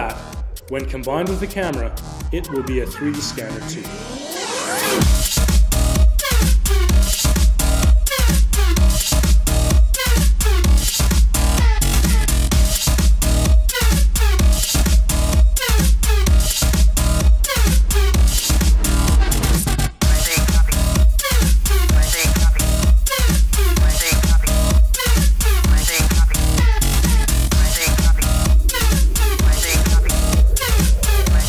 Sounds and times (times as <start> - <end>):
Music: 0.0 - 31.4.